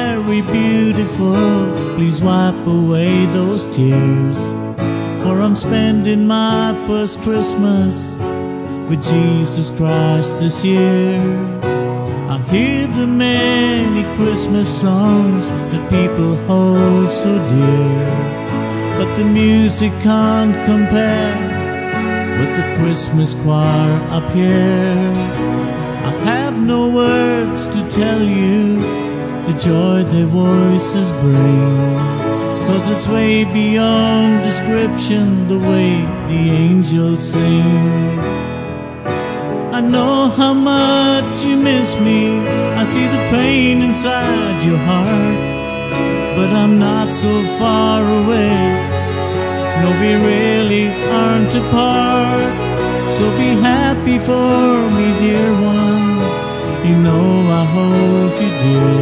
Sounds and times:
Christmas music: 0.0s - 59.0s
Tender music: 0.0s - 59.0s.

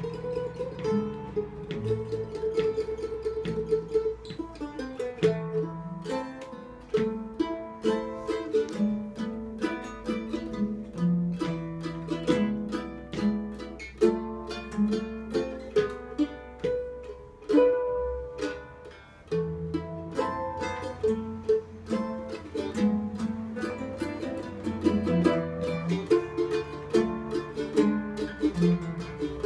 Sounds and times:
Guitar: 0.0s - 29.4s.

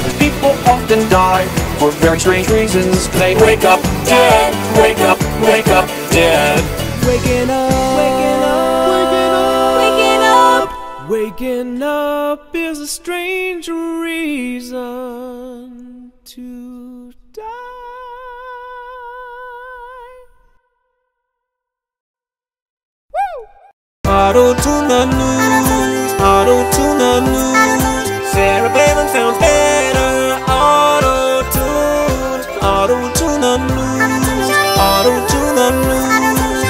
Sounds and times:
Music: 0.0s - 11.7s, 24.1s - 36.6s.

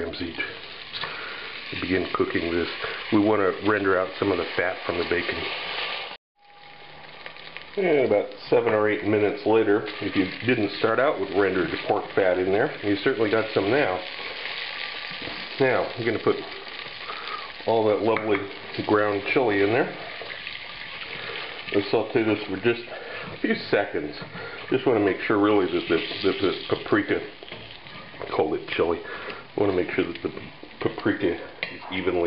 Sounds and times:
Frying (food): 0.0s - 32.2s
Sizzle: 0.0s - 32.2s.

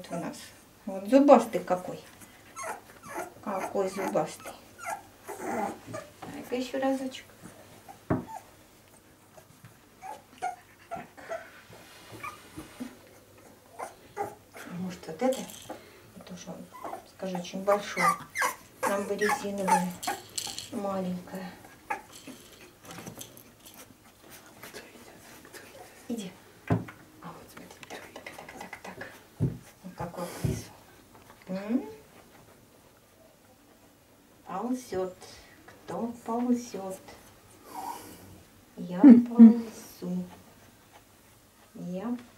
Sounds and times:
Speech: 0.0s - 2.1s, 3.4s - 4.6s, 6.3s - 7.3s, 14.7s - 15.6s, 16.2s - 18.2s, 18.8s - 20.0s, 20.7s - 21.6s, 26.1s - 26.4s, 31.5s - 32.0s, 34.5s - 37.2s, 38.8s - 40.4s, 41.8s - 42.3s.

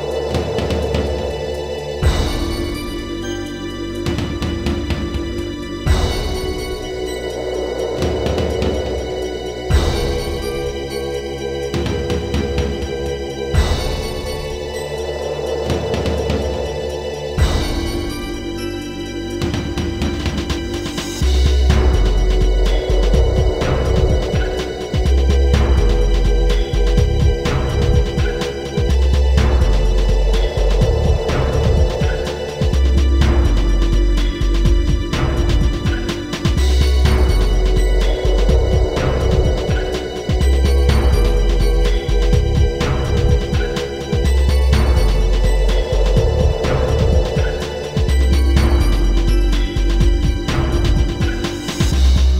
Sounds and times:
Scary music: 0.0s - 52.4s.

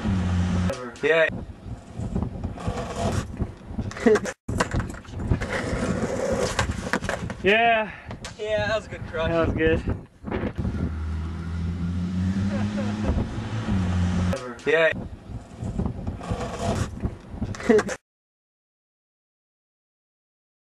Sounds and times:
Speech: 7.4s - 9.9s, 14.4s - 15.0s.

